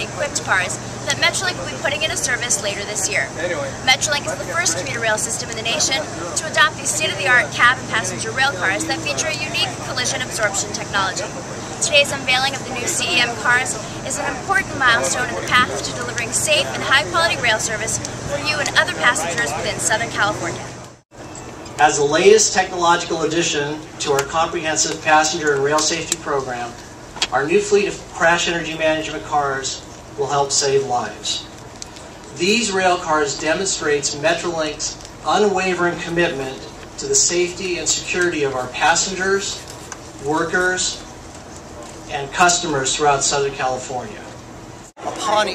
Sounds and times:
Speech: 0:00.0 - 0:20.8
Outside, urban or manmade: 0:00.0 - 0:45.5.

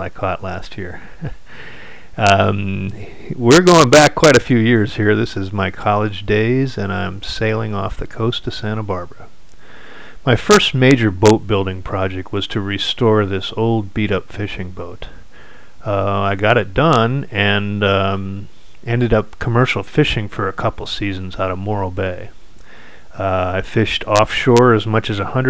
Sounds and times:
Speech: 0:00.0 - 0:01.0, 0:02.2 - 0:09.3, 0:10.2 - 0:15.2, 0:15.8 - 0:22.4, 0:23.2 - 0:25.4.

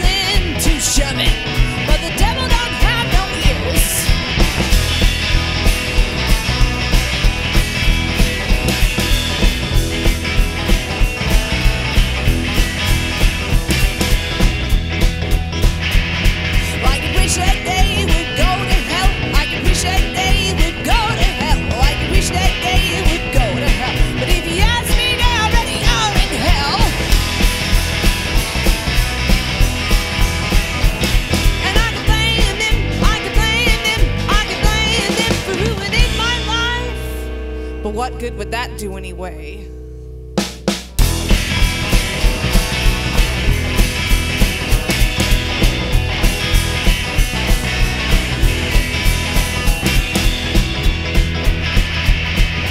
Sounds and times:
Music: 0:00.0 - 0:52.7.

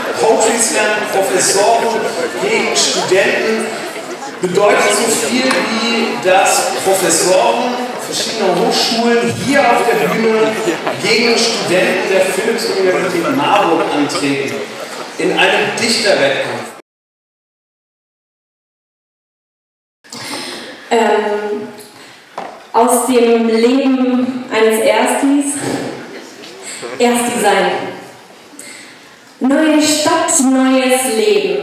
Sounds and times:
Speech: 0:00.0 - 0:16.8, 0:20.2 - 0:21.8, 0:22.8 - 0:26.1, 0:26.7 - 0:28.0, 0:29.4 - 0:31.6.

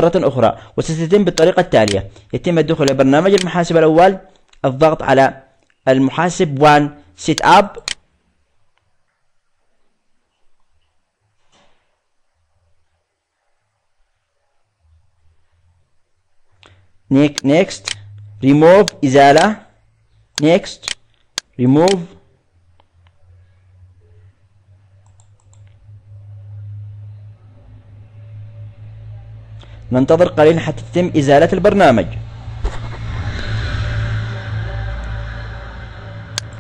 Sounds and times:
Speech: 0:00.0 - 0:07.9, 0:17.1 - 0:19.8, 0:20.4 - 0:20.9, 0:21.6 - 0:22.2, 0:29.9 - 0:32.2.

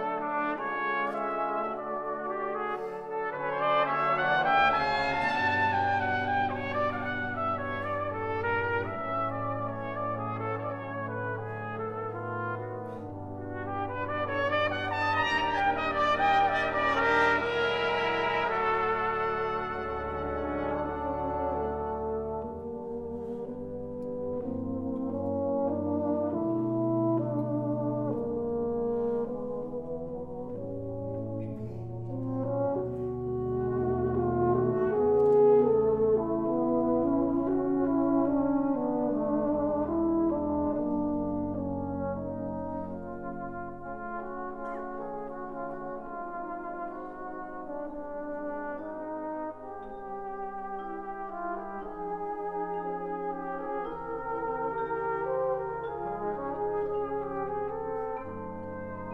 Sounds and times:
Classical music: 0:00.0 - 0:59.1
Orchestra: 0:00.0 - 0:59.1
Trumpet: 0:00.0 - 0:59.1.

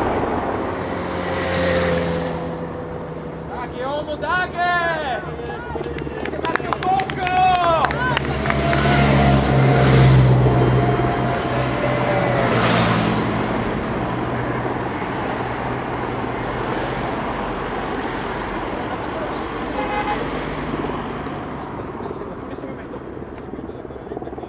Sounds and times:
Motorcycle: 0:00.0 - 0:04.3, 0:05.2 - 0:23.6
Car: 0:00.0 - 0:24.4.

